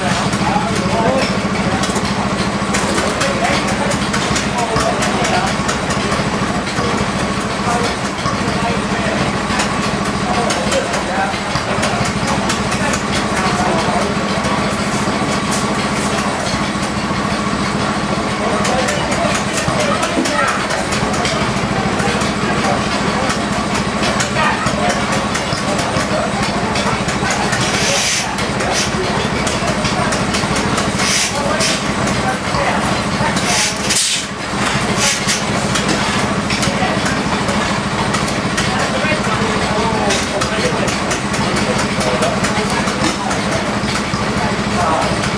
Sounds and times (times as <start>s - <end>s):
Heavy engine (low frequency): 0.0s - 45.3s
Idling: 0.0s - 45.3s
Speech: 0.0s - 45.3s.